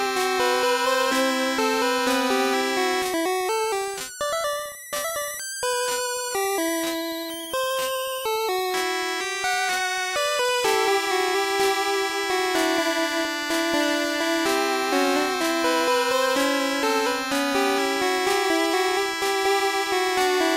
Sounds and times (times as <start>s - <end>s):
Music: 0.0s - 20.5s.